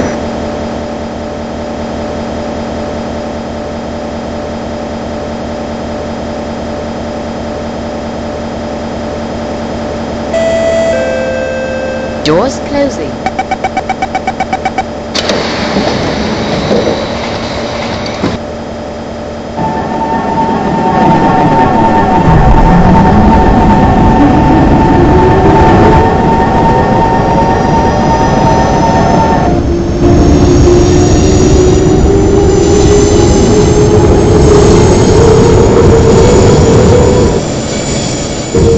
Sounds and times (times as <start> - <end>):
Subway, metro, underground: 0.0 - 38.7
Train: 0.0 - 38.7
Speech: 12.2 - 13.2.